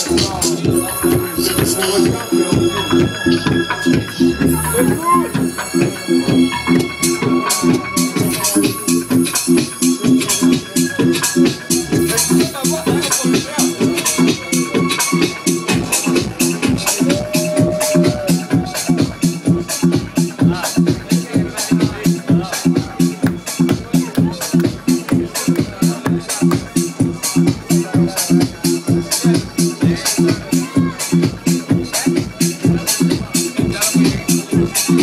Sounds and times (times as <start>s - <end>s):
Speech: 0.0s - 9.0s, 10.0s - 35.0s
Music: 0.0s - 35.0s.